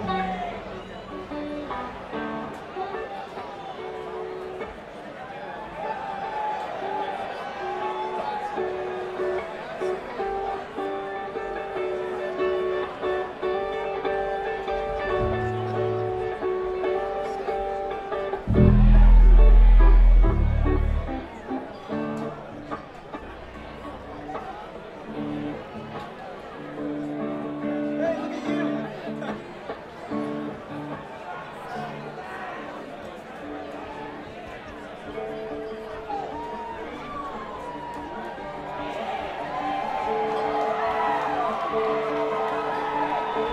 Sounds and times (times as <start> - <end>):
Music: 0.0 - 43.5
Speech: 20.7 - 39.4.